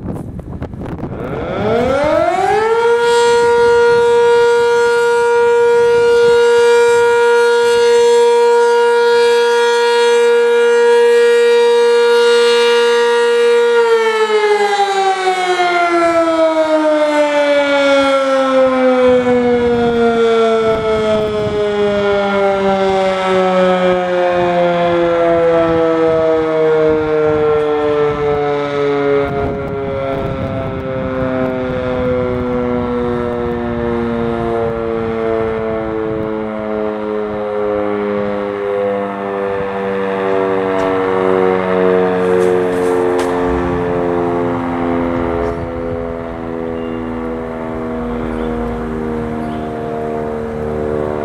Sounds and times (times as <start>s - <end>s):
Civil defense siren: 0.0s - 51.2s.